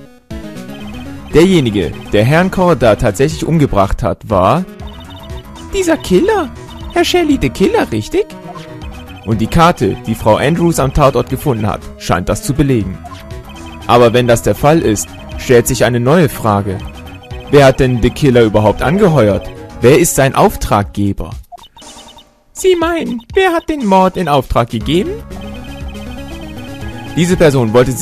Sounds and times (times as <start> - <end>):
Music: 0.0 - 28.0
Speech: 1.4 - 4.7, 5.7 - 8.3, 9.3 - 13.1, 13.9 - 16.8, 17.5 - 21.4, 22.6 - 25.2, 27.2 - 28.0.